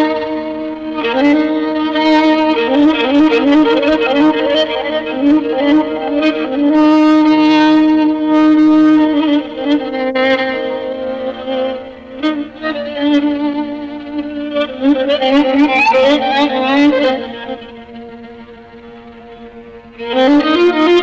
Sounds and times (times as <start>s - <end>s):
Violin, fiddle: 0.0s - 21.0s.